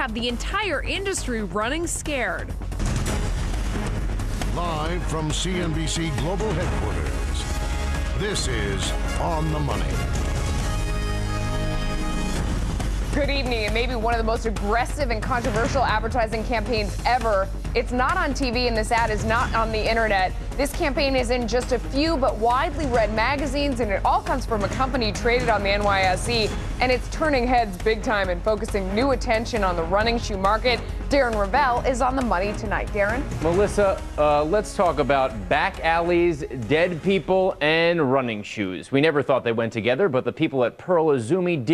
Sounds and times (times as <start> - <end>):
Music: 0.0 - 38.4.